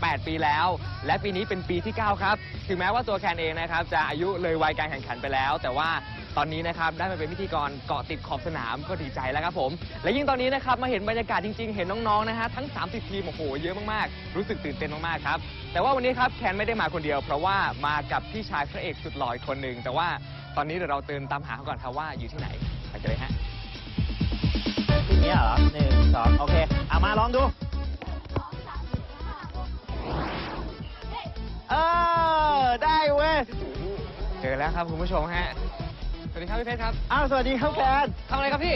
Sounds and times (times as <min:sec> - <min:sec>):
Music: 0:00.0 - 0:38.7.